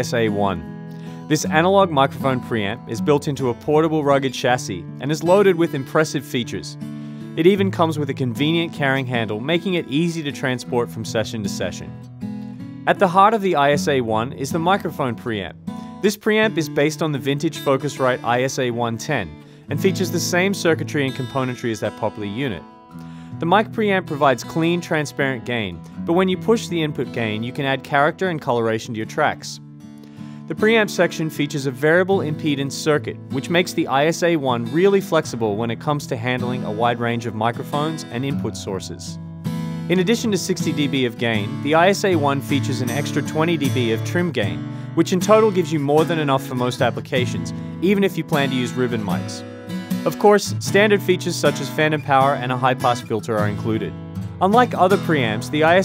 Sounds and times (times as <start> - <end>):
Speech: 0.0 - 0.7, 1.3 - 6.8, 7.4 - 12.0, 12.9 - 22.7, 23.4 - 29.6, 30.5 - 39.2, 39.9 - 49.4, 50.1 - 55.8
Music: 0.0 - 55.8.